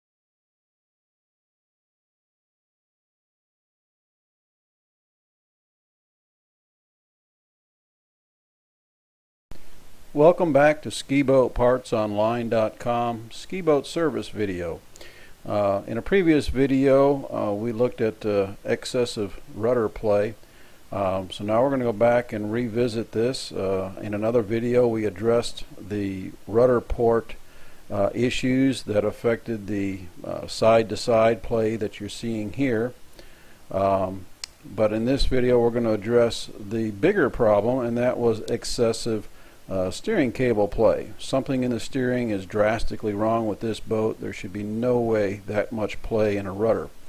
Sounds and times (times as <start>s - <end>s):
Speech: 10.2s - 14.8s, 15.4s - 33.0s, 33.7s - 47.0s.